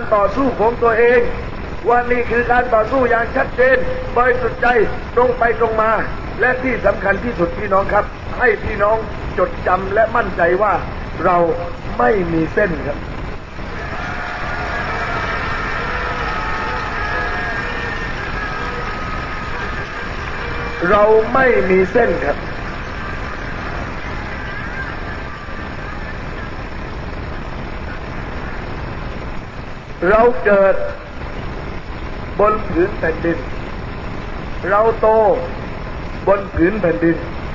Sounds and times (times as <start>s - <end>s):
Male speech, man speaking: 0.0s - 13.0s, 20.8s - 22.4s, 30.0s - 31.0s, 32.4s - 33.4s, 34.6s - 35.5s, 36.3s - 37.3s
Narration, monologue: 0.0s - 13.3s, 20.8s - 22.4s, 30.0s - 31.1s, 32.3s - 33.7s, 34.4s - 37.5s.